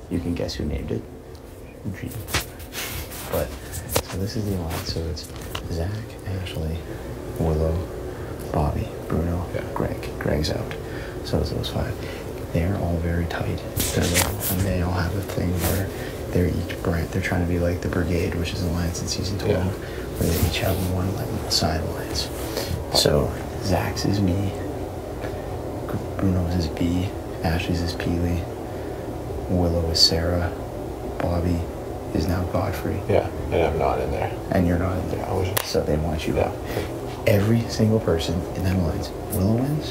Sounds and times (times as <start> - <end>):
Speech: 0.0 - 1.1, 1.8 - 2.5, 3.3 - 7.9, 8.5 - 24.6, 25.9 - 28.5, 29.5 - 30.6, 31.2 - 36.6, 37.2 - 39.9.